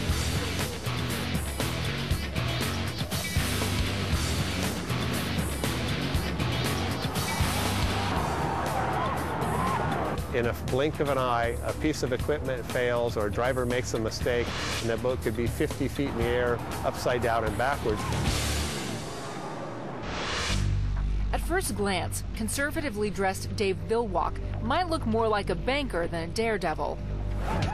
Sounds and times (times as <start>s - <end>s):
Music: 0.0s - 27.7s
Speech: 10.4s - 18.0s, 21.4s - 27.0s.